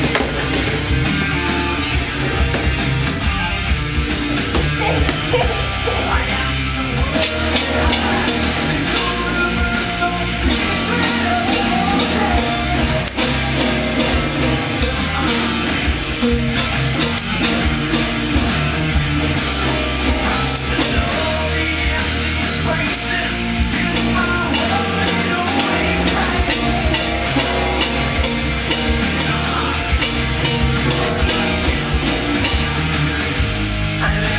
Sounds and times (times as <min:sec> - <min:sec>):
Acoustic guitar: 0:00.0 - 0:34.3
Heavy metal: 0:00.0 - 0:34.3
Strum: 0:00.0 - 0:34.3.